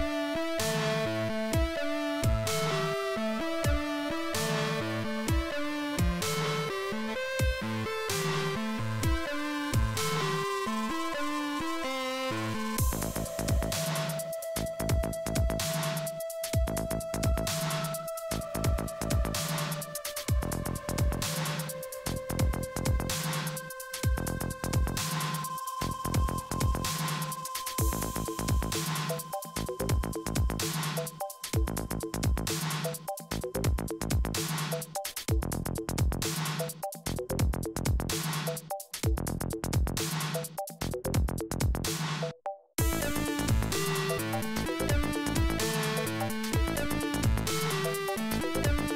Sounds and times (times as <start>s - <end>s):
Music: 0.0s - 48.9s.